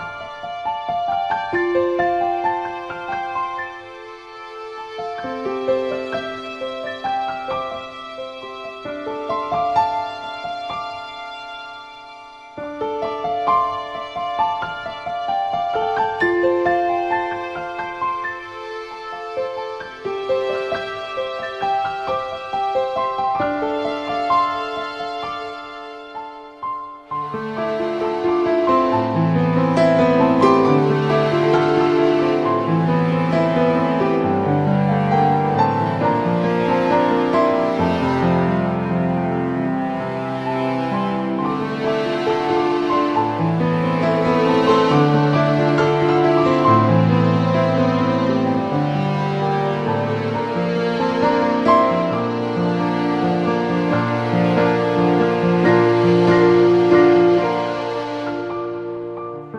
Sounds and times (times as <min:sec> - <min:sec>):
Music: 0:00.0 - 0:59.5.